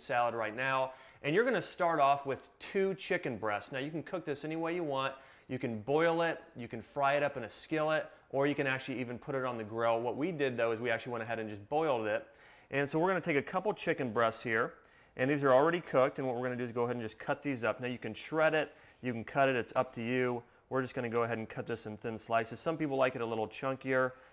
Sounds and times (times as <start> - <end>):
Speech: 0.0 - 24.2.